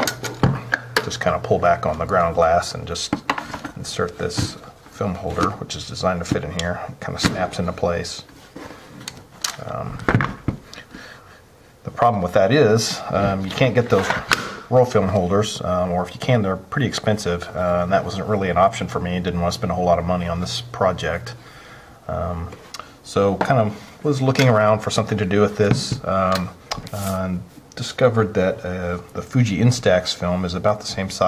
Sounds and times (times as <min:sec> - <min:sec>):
Speech: 0:01.0 - 0:03.2, 0:03.8 - 0:08.3, 0:09.6 - 0:10.1, 0:11.8 - 0:21.4, 0:22.1 - 0:31.2.